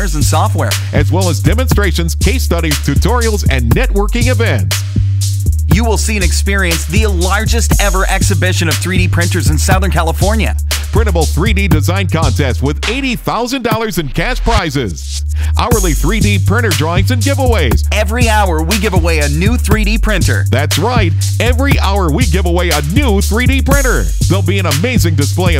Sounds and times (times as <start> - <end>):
Speech: 0.0 - 4.7, 5.7 - 25.6
Music: 0.0 - 25.6.